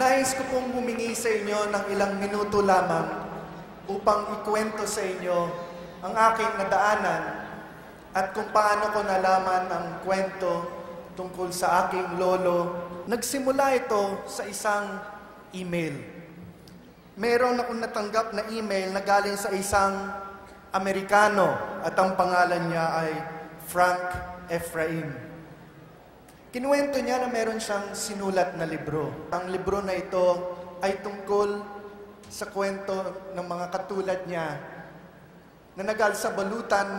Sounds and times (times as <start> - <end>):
Male speech, man speaking: 0.0 - 3.3, 3.9 - 7.5, 8.2 - 16.2, 17.2 - 25.3, 26.5 - 34.8, 35.8 - 36.9
Narration, monologue: 0.0 - 36.9.